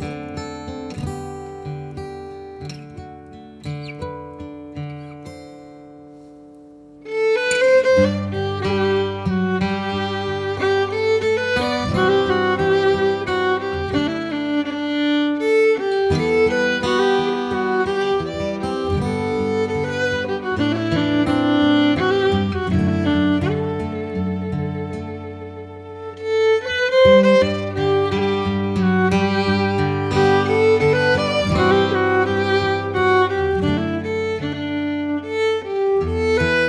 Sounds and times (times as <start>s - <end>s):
String section: 7.0s - 36.6s.